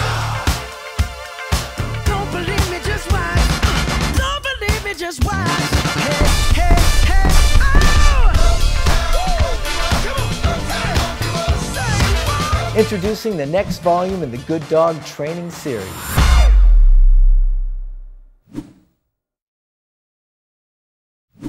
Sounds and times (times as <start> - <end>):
Music: 0.0 - 18.2.